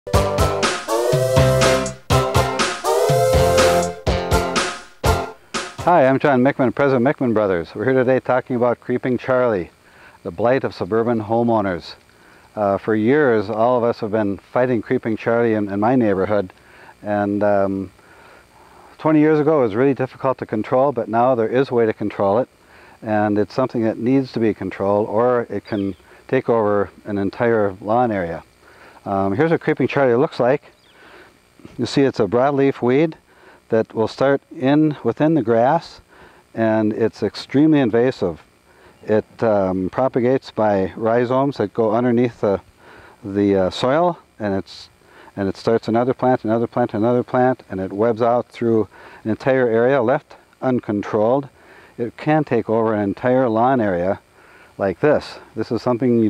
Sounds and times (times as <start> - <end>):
Music: 0.1 - 6.0
Speech: 5.8 - 12.0, 12.6 - 17.9, 19.0 - 28.4, 29.0 - 30.7, 31.6 - 36.0, 36.6 - 38.4, 39.0 - 42.6, 43.2 - 54.2, 54.8 - 56.2.